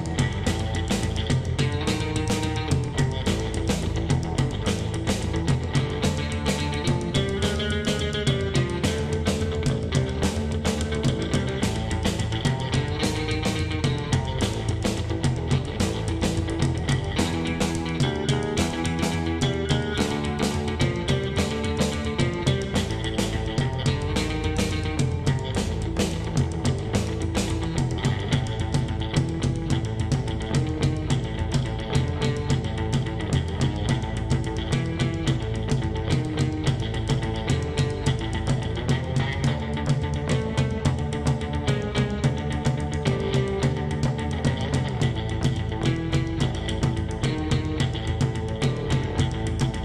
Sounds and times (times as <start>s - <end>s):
Music: 0.0s - 49.8s.